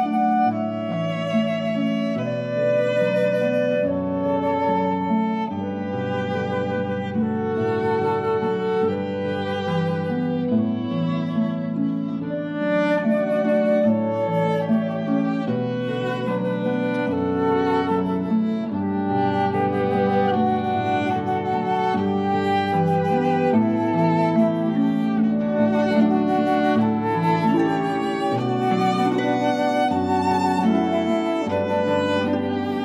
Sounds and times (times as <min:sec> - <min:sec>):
Flute: 0:00.0 - 0:32.8
Violin, fiddle: 0:00.0 - 0:32.8.